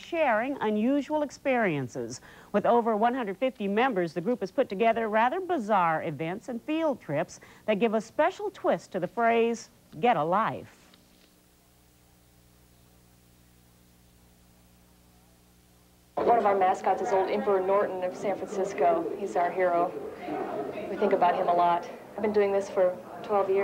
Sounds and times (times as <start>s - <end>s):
Speech: 0.0s - 10.8s, 16.2s - 23.6s.